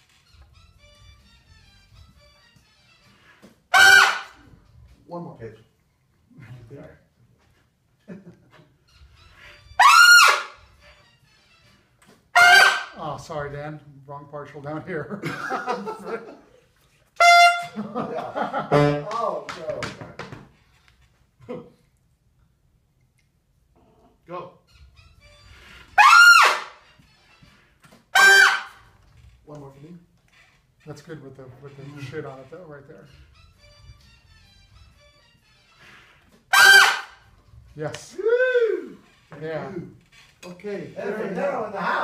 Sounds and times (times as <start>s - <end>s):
Music: 0.0s - 5.8s, 8.0s - 16.4s, 17.2s - 19.4s, 24.3s - 42.0s.